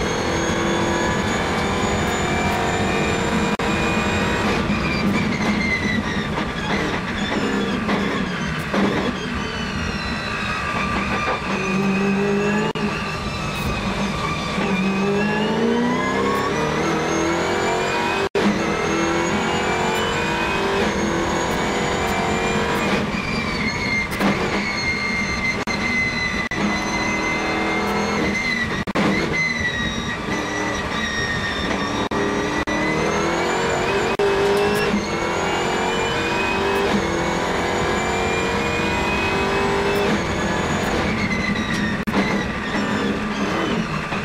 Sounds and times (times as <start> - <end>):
Race car, auto racing: 0.0 - 44.2.